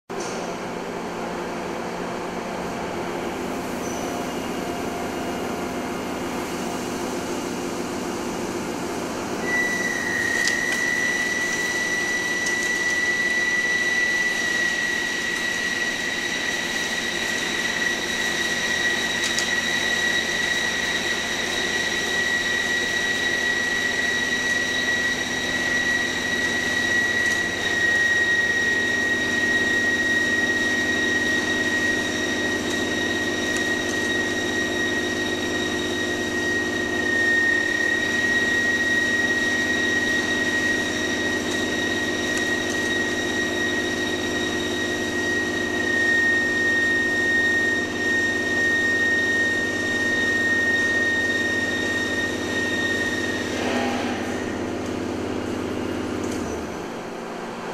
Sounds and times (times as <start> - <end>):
Drill: 9.4 - 56.8.